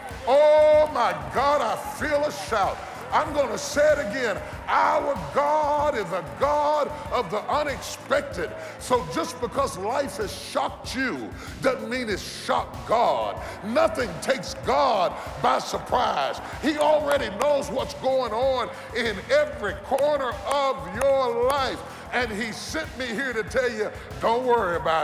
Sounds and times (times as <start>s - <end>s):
Music: 0.0s - 25.0s
Speech: 0.2s - 25.0s.